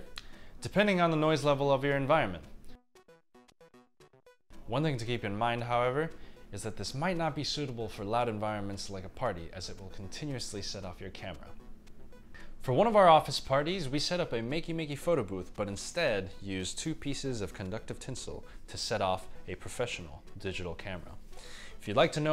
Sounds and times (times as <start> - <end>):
Music: 0.0 - 22.3
Speech: 0.6 - 2.5, 4.7 - 11.6, 12.6 - 21.2, 21.8 - 22.3.